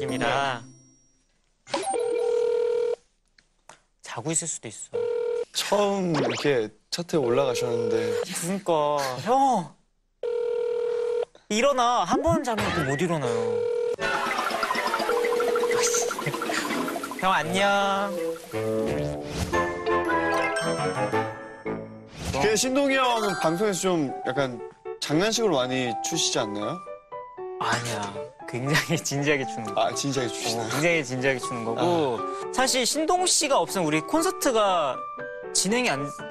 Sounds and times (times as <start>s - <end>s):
Music: 0.0s - 1.2s, 14.0s - 36.3s.